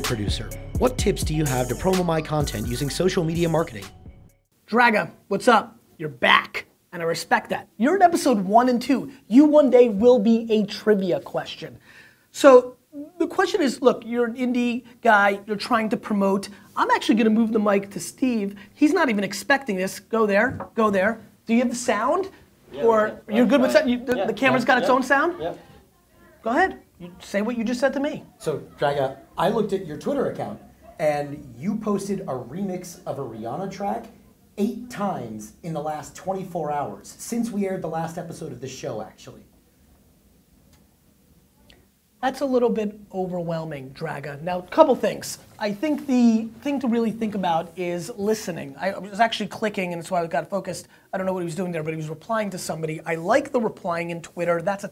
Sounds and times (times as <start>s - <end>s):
Speech: 0.0s - 3.9s, 12.4s - 39.5s, 42.2s - 54.9s.